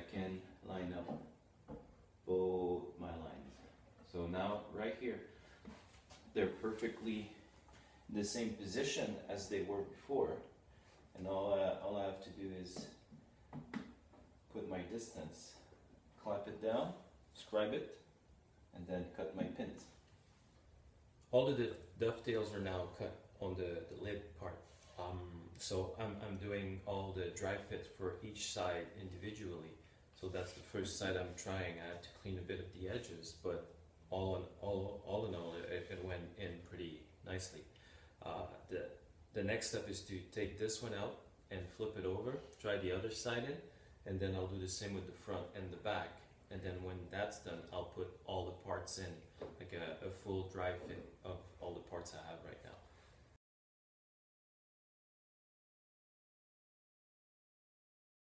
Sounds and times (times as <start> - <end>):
Speech: 0.0 - 1.4, 2.2 - 5.3, 6.3 - 7.5, 8.1 - 13.1, 14.5 - 18.1, 18.7 - 20.0, 21.3 - 52.9
Inside, small room: 0.0 - 53.4.